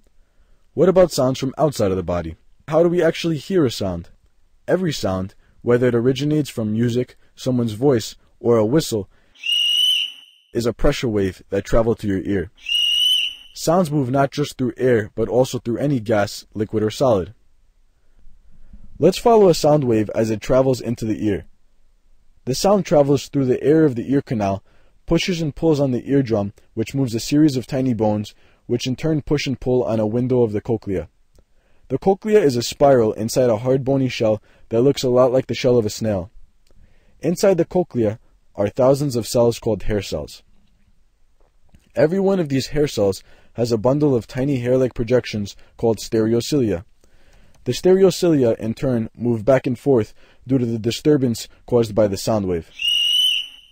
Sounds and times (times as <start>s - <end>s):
Speech: 0.8s - 4.1s, 4.7s - 9.1s, 10.6s - 12.5s, 13.6s - 17.4s, 19.0s - 21.5s, 22.4s - 31.1s, 31.9s - 36.3s, 37.2s - 40.4s, 41.9s - 46.9s, 47.6s - 52.7s.